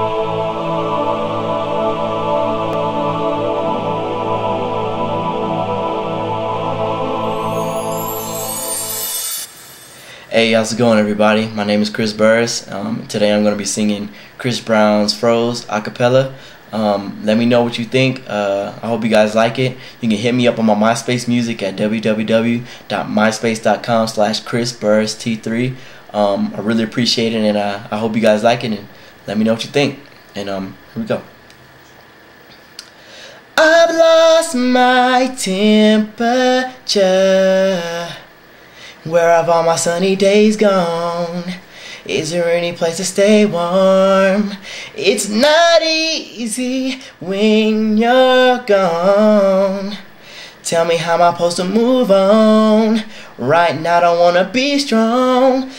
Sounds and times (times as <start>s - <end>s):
Male singing: 10.3s - 29.6s, 33.6s - 38.3s, 39.0s - 50.0s, 50.6s - 55.7s
Speech: 10.3s - 31.3s.